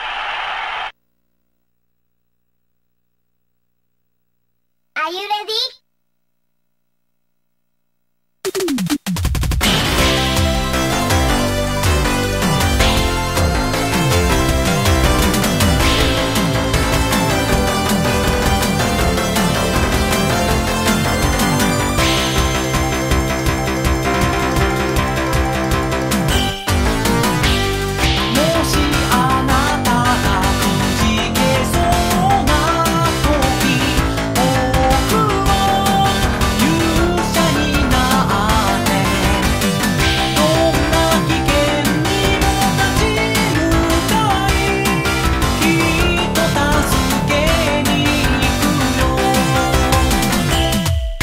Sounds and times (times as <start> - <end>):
Music: 8.5 - 51.2.